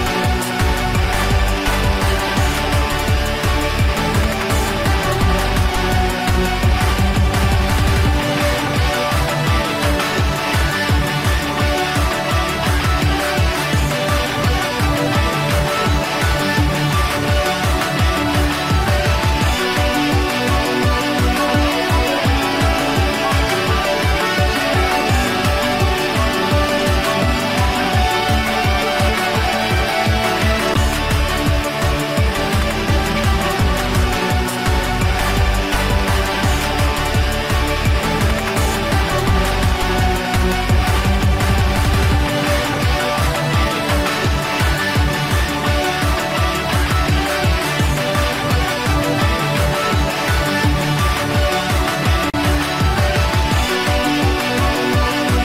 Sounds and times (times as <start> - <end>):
Background music: 0.0 - 55.4.